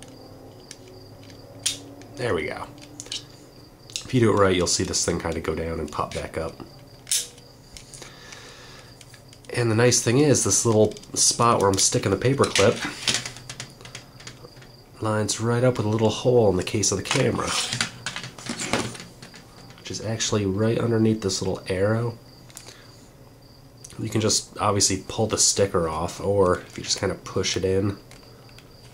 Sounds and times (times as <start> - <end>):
Speech: 2.2 - 2.7, 4.0 - 6.6, 9.5 - 12.9, 15.0 - 17.7, 19.8 - 22.2, 23.9 - 28.0.